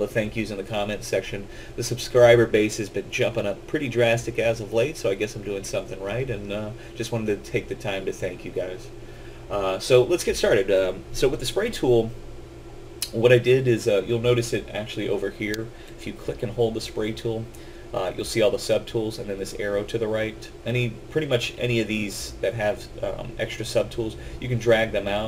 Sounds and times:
Speech: 0.0s - 8.9s, 9.5s - 12.2s, 13.0s - 25.2s.

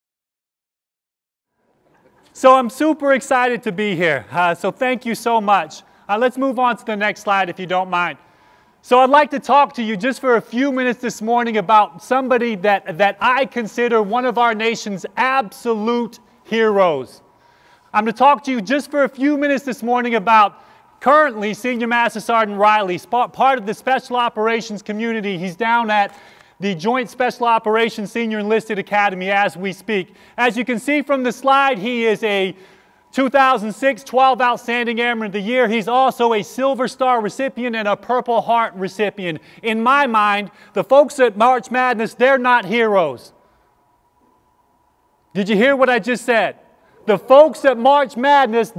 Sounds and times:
Narration, monologue: 1.5s - 48.7s
Male speech, man speaking: 2.4s - 8.2s, 8.9s - 17.2s, 17.9s - 43.4s, 45.4s - 48.7s.

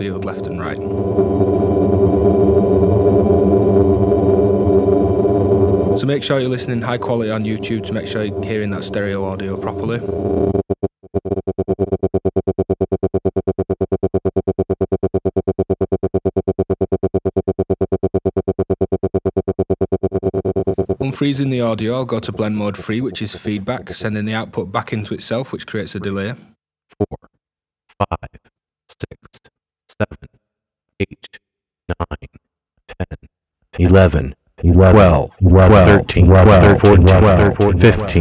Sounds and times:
Synthesizer: 0.0s - 10.6s.

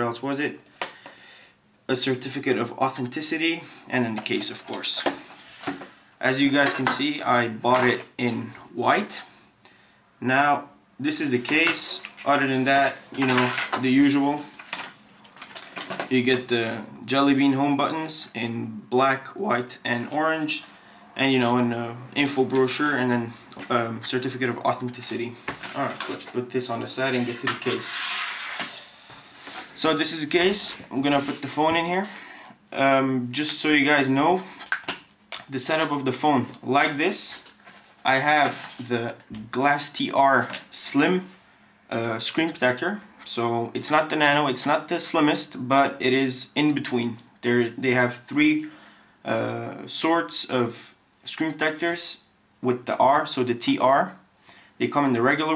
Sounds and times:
Speech: 0.0s - 0.6s, 1.9s - 5.2s, 6.2s - 9.4s, 10.2s - 14.6s, 16.0s - 28.1s, 29.8s - 34.6s, 35.4s - 54.2s, 54.8s - 55.5s
Inside, small room: 0.0s - 55.5s.

